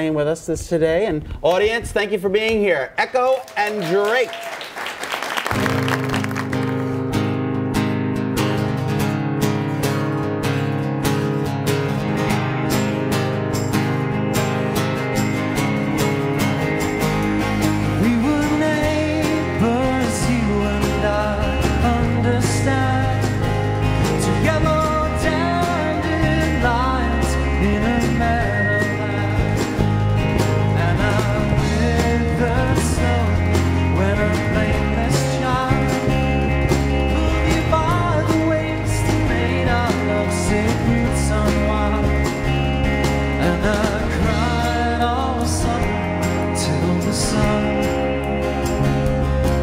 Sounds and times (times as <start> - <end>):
Music: 3.6 - 49.6.